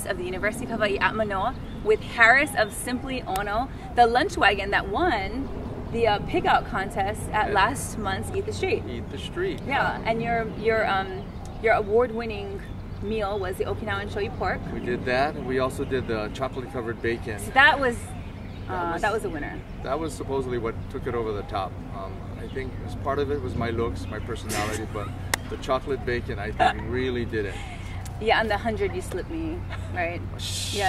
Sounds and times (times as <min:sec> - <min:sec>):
Speech: 0:18.7 - 0:27.2.